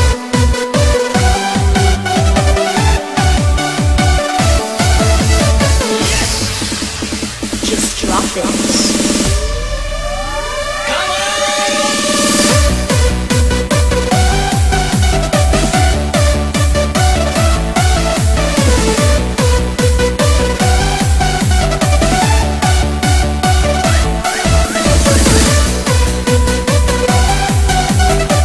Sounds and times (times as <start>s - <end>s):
Soundtrack music: 0.0s - 28.4s
Speech: 7.6s - 9.0s.